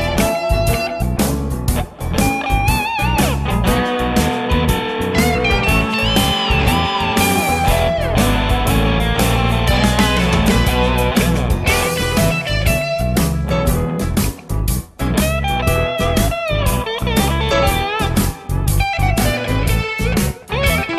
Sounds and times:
Blues: 0.0s - 20.9s.

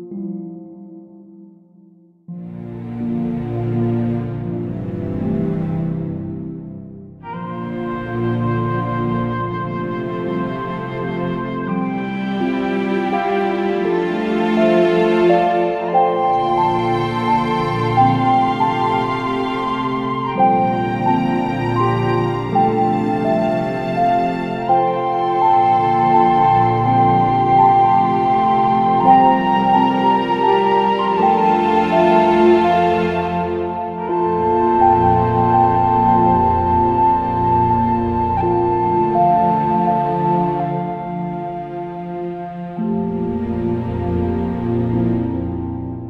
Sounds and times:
Background music: 0.0s - 46.1s.

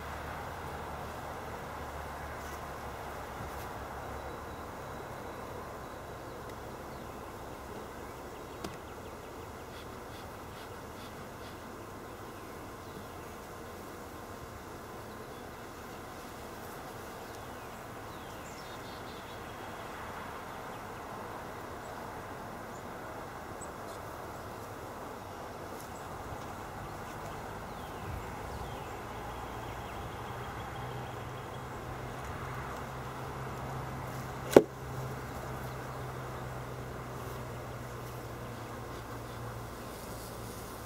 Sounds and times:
Bee, wasp, etc.: 0.0s - 40.8s
Fly, housefly: 0.2s - 40.8s.

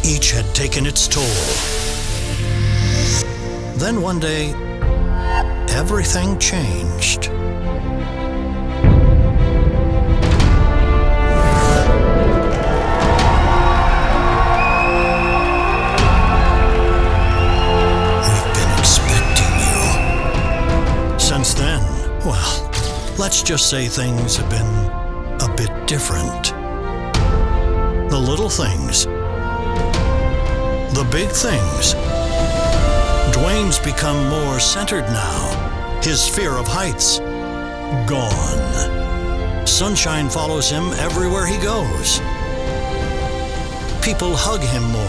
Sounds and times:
Speech: 0.0s - 1.6s, 3.8s - 4.6s, 5.7s - 7.3s, 18.2s - 20.0s, 21.2s - 26.6s, 28.1s - 29.1s, 30.9s - 32.0s, 33.3s - 37.2s, 37.9s - 38.9s, 39.6s - 42.2s, 44.0s - 45.0s
Music: 0.0s - 45.0s.

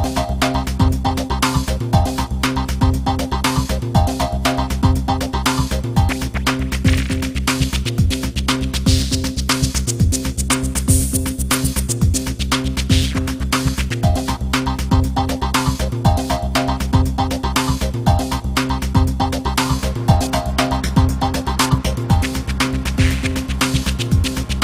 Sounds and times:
Music: 0.0s - 24.6s.

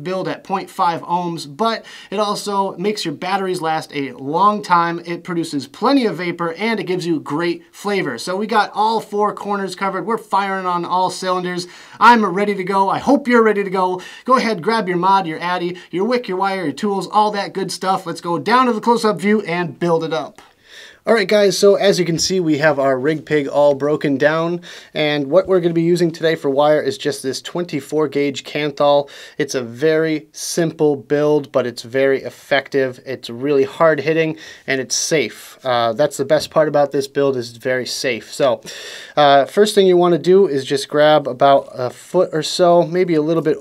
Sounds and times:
Speech: 0.0s - 20.5s, 21.1s - 43.6s.

